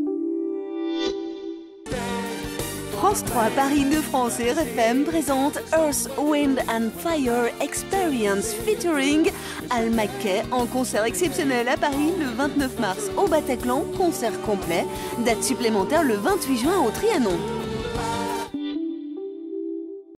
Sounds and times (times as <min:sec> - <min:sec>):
Music: 0:00.0 - 0:20.1
Speech: 0:03.0 - 0:17.5.